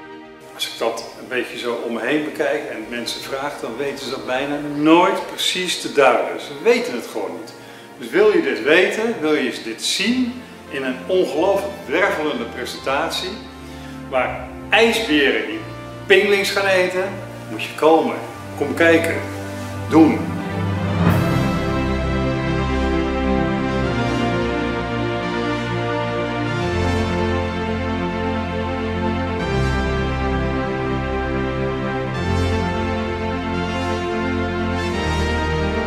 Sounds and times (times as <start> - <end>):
Music: 0.0 - 35.8
Speech: 0.6 - 13.5, 14.1 - 19.3, 19.9 - 20.4.